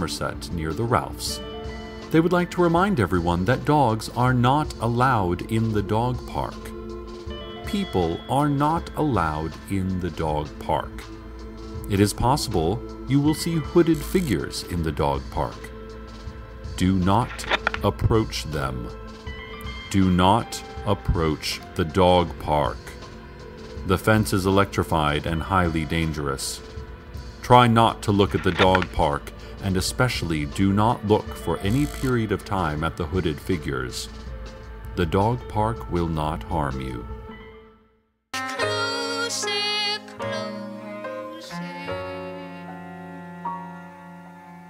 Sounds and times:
Speech: 0.0 - 1.4, 2.1 - 6.8, 7.7 - 11.1, 11.9 - 15.7, 16.8 - 19.0, 19.9 - 23.0, 23.8 - 26.6, 27.4 - 34.1, 35.0 - 37.1
Music: 0.0 - 44.6.

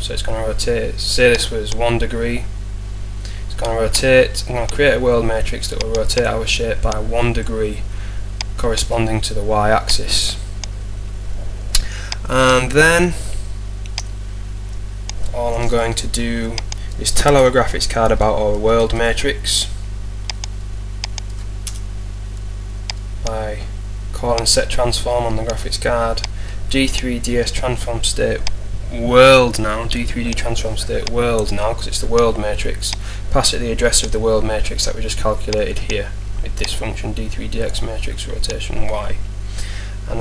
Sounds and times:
Speech: 0.0 - 2.5, 3.5 - 7.9, 8.6 - 10.4, 12.3 - 13.4, 15.3 - 19.8, 23.2 - 39.2.

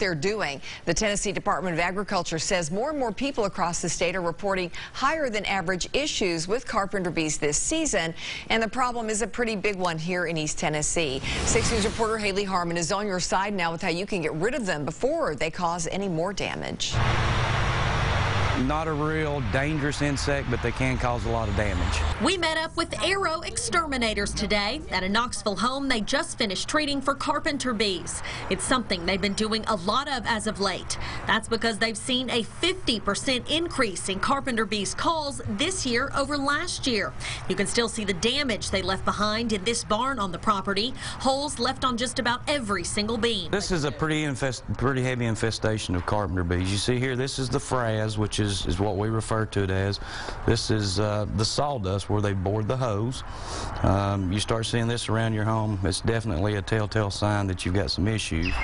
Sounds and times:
Speech: 18.6 - 26.0, 53.8 - 58.6.

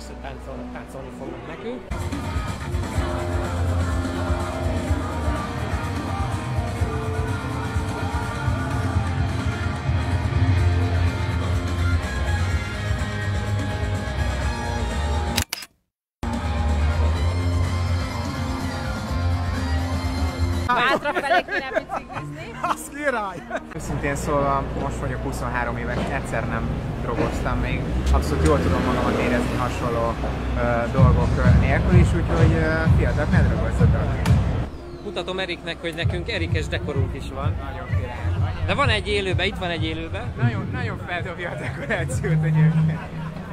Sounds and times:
Music: 0.0 - 15.4, 16.2 - 28.7, 29.3 - 43.5
Outside, urban or manmade: 0.0 - 43.5.

